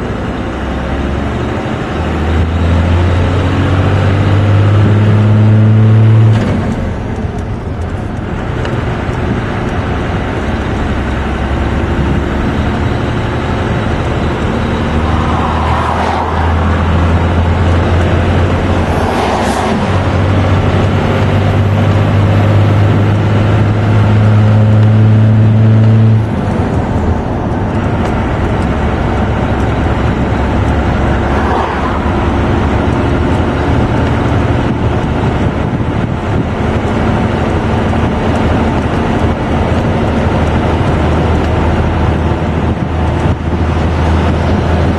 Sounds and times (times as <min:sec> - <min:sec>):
Car: 0:00.0 - 0:44.9
Outside, urban or manmade: 0:00.0 - 0:44.9.